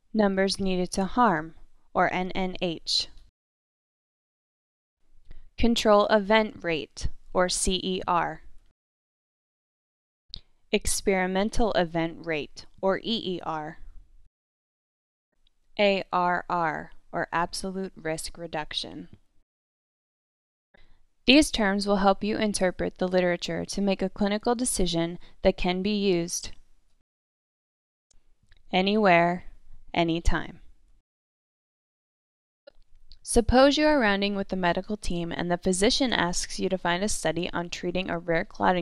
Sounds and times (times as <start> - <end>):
Speech: 0.2 - 3.1, 5.6 - 8.4, 10.8 - 13.8, 15.8 - 19.1, 21.3 - 26.5, 28.7 - 30.6, 33.2 - 38.8.